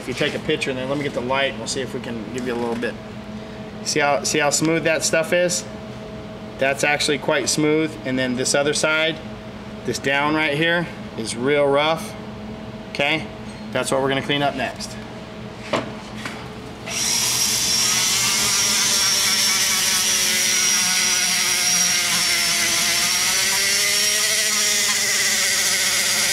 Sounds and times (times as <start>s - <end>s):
Speech: 0.0s - 3.0s, 3.8s - 5.7s, 6.6s - 9.2s, 9.8s - 12.2s, 12.9s - 15.0s.